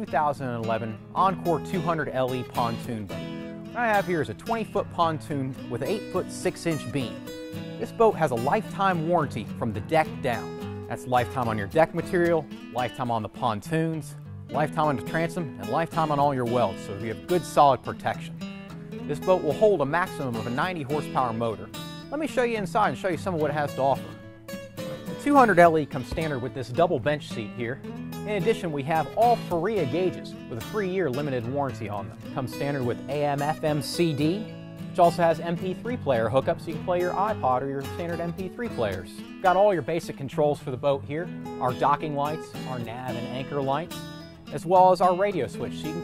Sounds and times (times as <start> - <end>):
Speech: 0.0 - 3.2, 3.8 - 7.2, 7.8 - 18.3, 19.1 - 24.2, 24.9 - 43.9, 44.5 - 46.0
Music: 0.0 - 46.0.